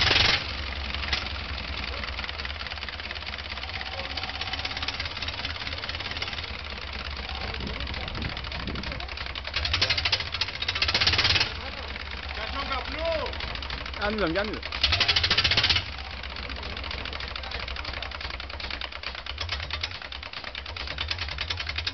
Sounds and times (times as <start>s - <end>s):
Engine: 0.0s - 21.9s
Outside, urban or manmade: 0.0s - 21.9s
Speech: 11.6s - 13.4s.